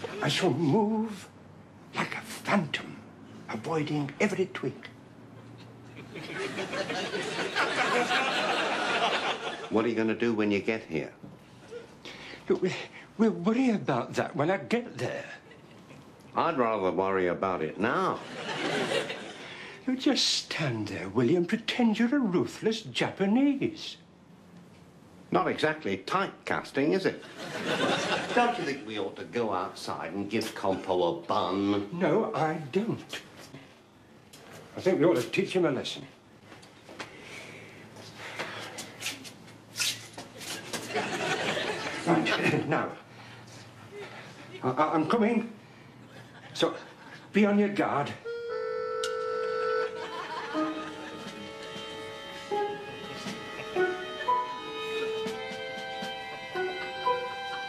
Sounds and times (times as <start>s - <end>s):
Speech: 0.2s - 1.3s, 2.0s - 5.0s, 9.7s - 11.2s, 12.5s - 15.4s, 16.3s - 18.2s, 19.8s - 24.0s, 25.3s - 27.2s, 28.3s - 33.3s, 34.8s - 36.2s, 42.0s - 43.0s, 44.6s - 45.6s, 46.6s - 48.2s.